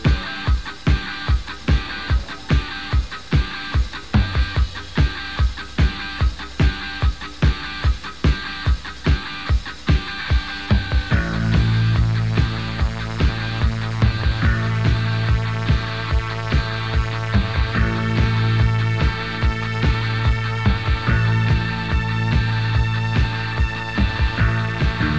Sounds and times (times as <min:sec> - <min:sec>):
Music: 0:00.0 - 0:25.1.